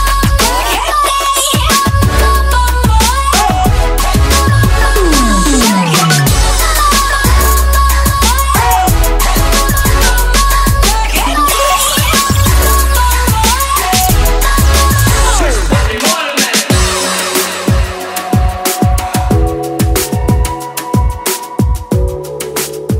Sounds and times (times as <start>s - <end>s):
Drum and bass: 0.0s - 22.9s.